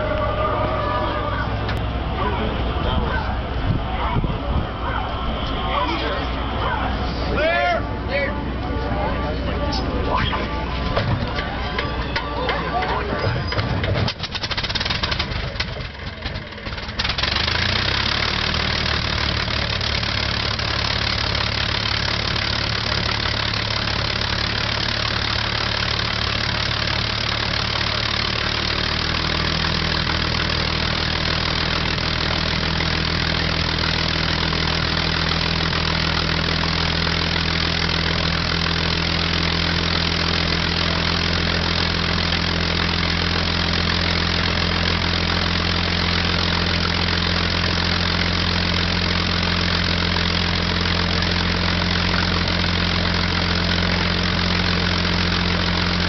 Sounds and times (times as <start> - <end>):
Heavy engine (low frequency): 0.0 - 56.0
Idling: 0.0 - 56.0
Vehicle: 0.0 - 56.0.